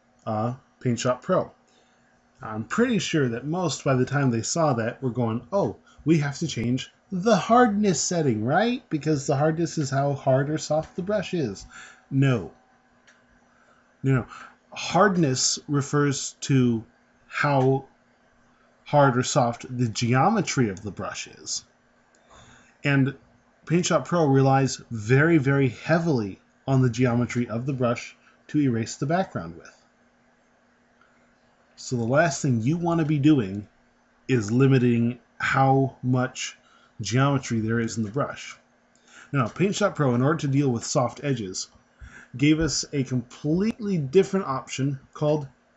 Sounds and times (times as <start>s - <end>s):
Speech: 0.3s - 1.5s, 2.4s - 12.6s, 14.0s - 17.9s, 18.9s - 21.6s, 22.8s - 29.7s, 31.8s - 33.7s, 34.3s - 38.6s, 39.2s - 45.5s.